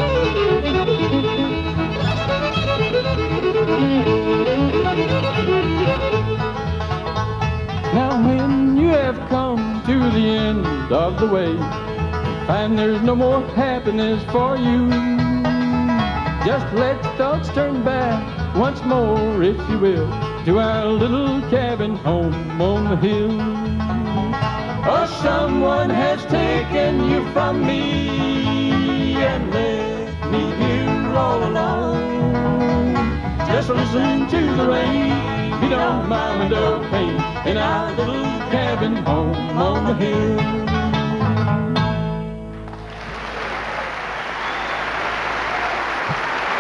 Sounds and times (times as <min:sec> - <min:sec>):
Bluegrass: 0:00.0 - 0:46.6.